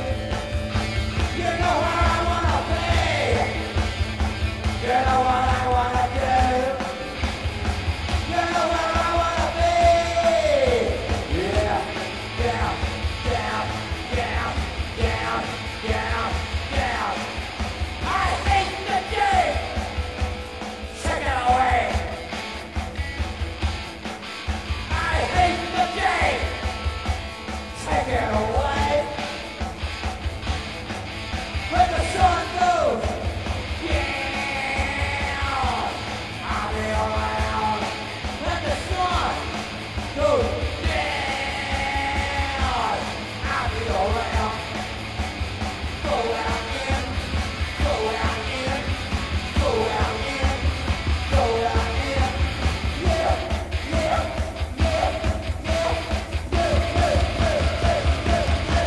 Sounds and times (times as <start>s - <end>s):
Singing: 0.0s - 4.0s, 4.6s - 7.3s, 8.2s - 22.3s, 24.9s - 26.8s, 31.7s - 58.8s
Inside, large room or hall: 0.0s - 58.8s
Music: 0.0s - 58.8s.